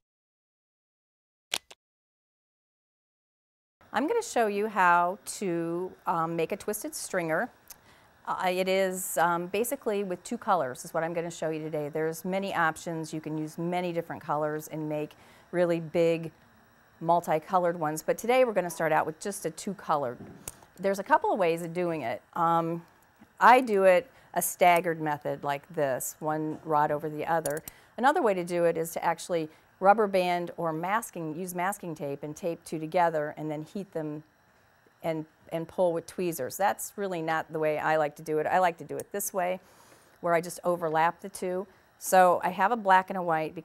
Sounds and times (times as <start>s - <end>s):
Speech: 4.0s - 7.6s, 8.3s - 16.3s, 17.0s - 20.2s, 20.8s - 34.3s, 35.0s - 39.6s, 40.2s - 43.6s.